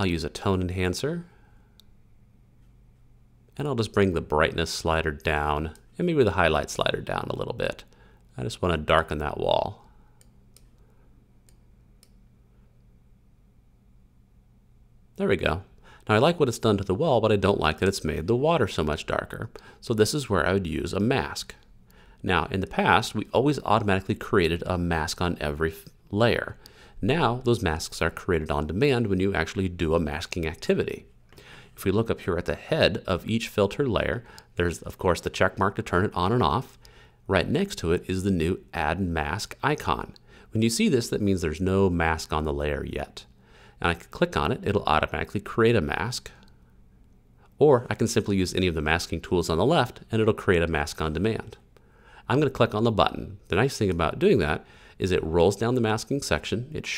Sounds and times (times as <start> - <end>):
Speech: 0.0 - 1.3, 3.6 - 9.9, 15.2 - 31.1, 31.8 - 46.5, 47.6 - 51.7, 52.3 - 56.9.